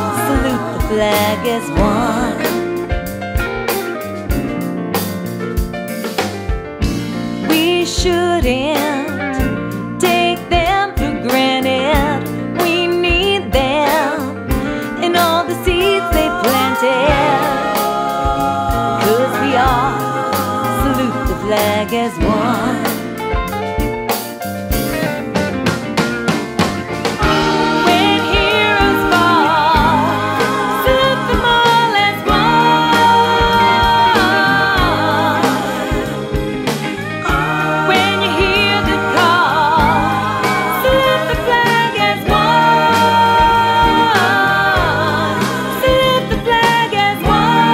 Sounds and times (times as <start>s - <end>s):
Independent music: 0.0s - 47.7s.